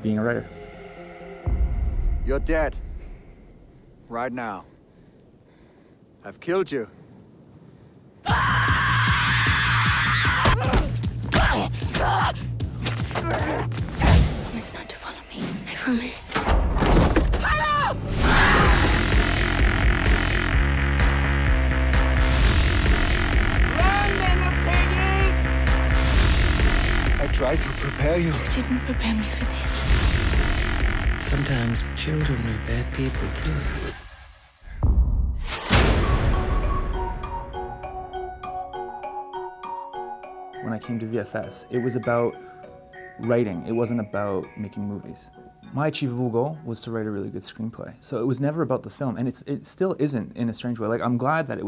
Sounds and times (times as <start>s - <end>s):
Music: 0.0s - 2.8s, 8.4s - 16.7s, 17.5s - 34.1s, 34.8s - 47.4s.